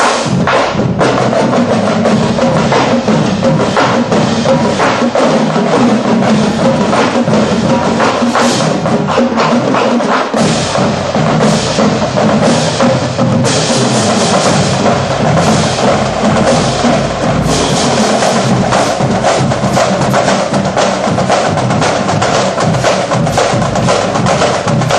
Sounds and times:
Percussion: 0:00.0 - 0:24.9.

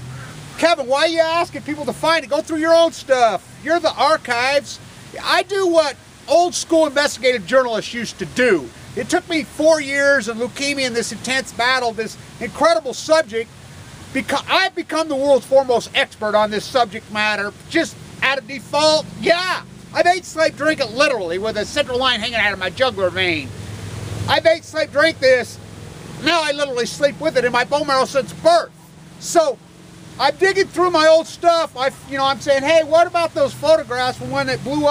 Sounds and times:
Speech: 0:00.6 - 0:13.5, 0:14.1 - 0:23.5, 0:24.3 - 0:25.6, 0:26.2 - 0:29.6, 0:30.2 - 0:34.9.

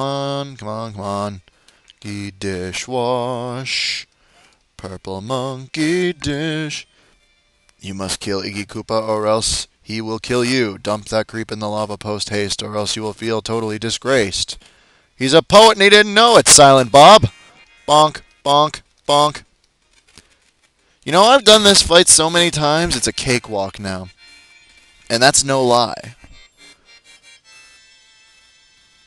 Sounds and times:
Music: 0:06.1 - 0:08.0, 0:16.7 - 0:18.5, 0:22.6 - 0:29.0
Speech: 0:07.8 - 0:14.6, 0:15.2 - 0:17.3, 0:17.9 - 0:19.4, 0:21.1 - 0:24.1, 0:25.1 - 0:26.2.

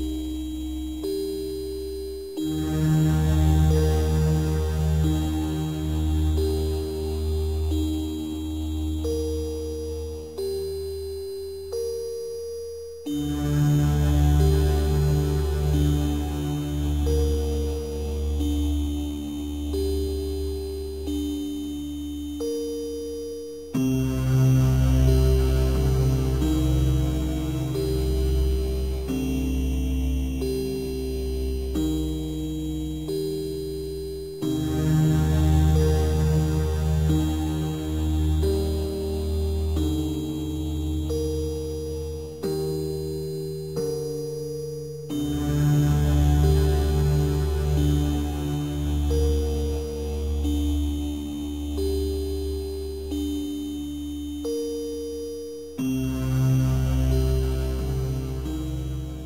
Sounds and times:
Chime: 0:00.0 - 0:59.2.

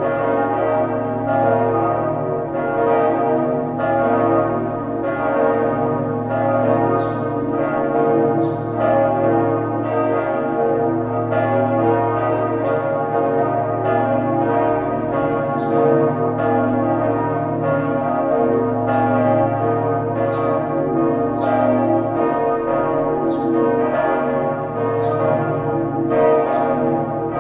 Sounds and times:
Bell: 0:00.0 - 0:27.4.

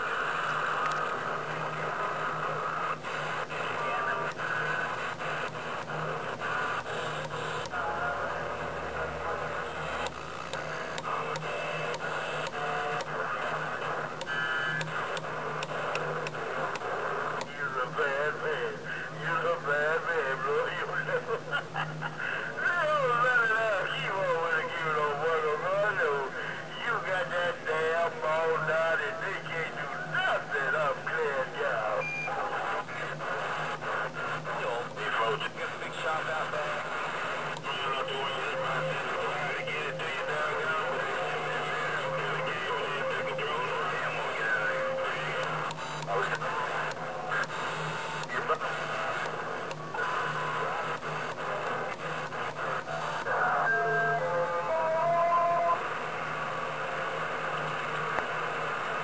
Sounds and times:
Radio: 0:00.0 - 0:59.0
Speech: 0:03.6 - 0:05.0, 0:07.6 - 0:09.8, 0:17.4 - 0:21.6, 0:22.6 - 0:33.2, 0:34.4 - 0:37.0, 0:37.6 - 0:47.6, 0:48.3 - 0:49.4.

